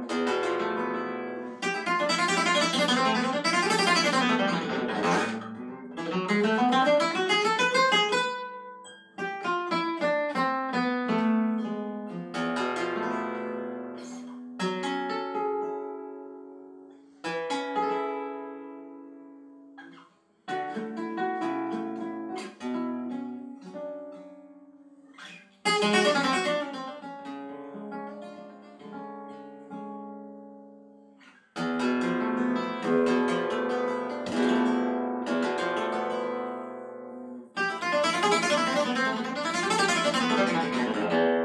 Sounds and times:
Acoustic guitar: 0.0s - 41.4s
Flamenco: 0.0s - 41.4s.

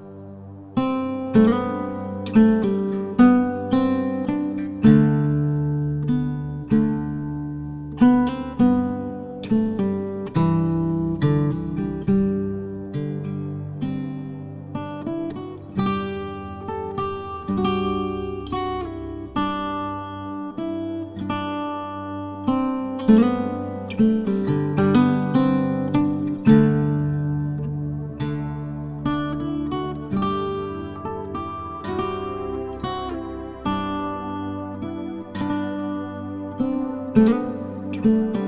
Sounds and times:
Music: 0.0s - 38.4s.

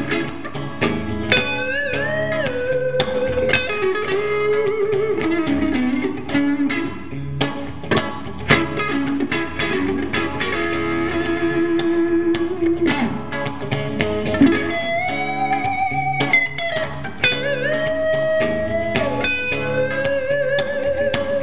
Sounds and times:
Bass guitar: 0.0s - 21.4s
Electric guitar: 0.0s - 21.4s.

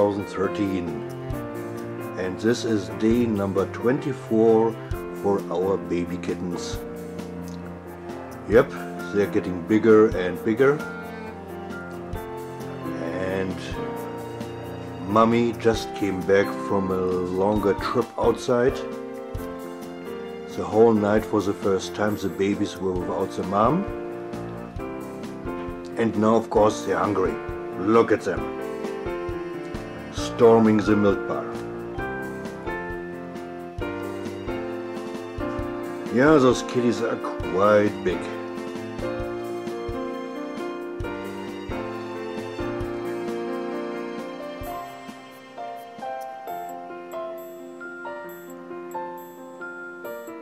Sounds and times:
Speech: 0.0s - 1.0s, 2.2s - 6.8s, 8.5s - 10.8s, 13.0s - 13.8s, 15.0s - 18.8s, 20.5s - 23.9s, 25.9s - 28.4s, 30.2s - 31.6s, 36.1s - 38.4s
Music: 0.0s - 50.4s.

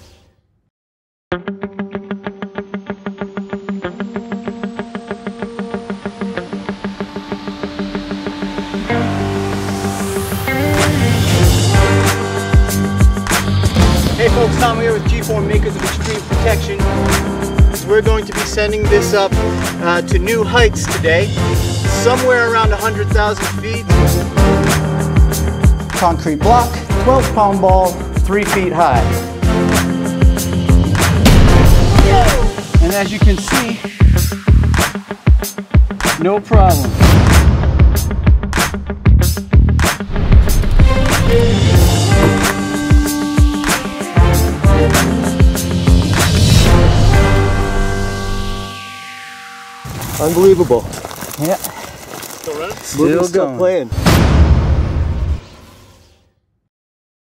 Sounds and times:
Music: 1.3s - 56.7s
Speech: 14.2s - 16.8s, 17.9s - 21.3s, 22.0s - 23.8s, 26.0s - 29.1s, 32.0s - 33.8s, 36.2s - 36.9s, 50.2s - 51.6s, 52.5s - 53.9s.

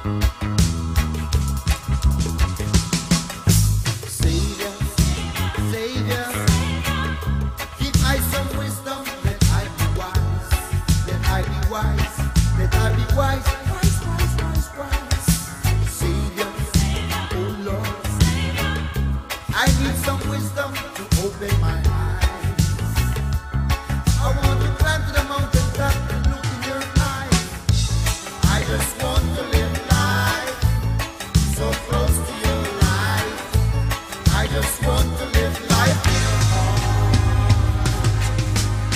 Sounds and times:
Funk: 0.0s - 38.9s.

